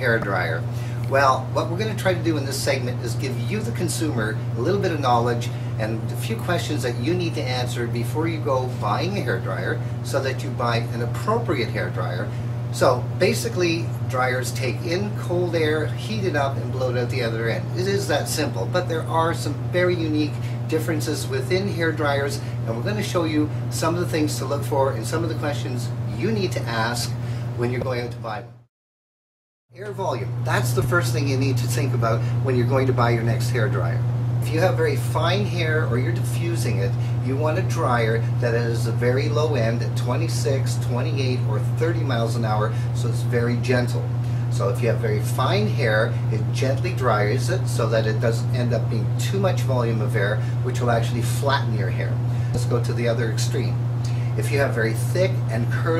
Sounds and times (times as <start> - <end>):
Speech: 0.0 - 28.6, 29.8 - 53.8, 54.4 - 55.9.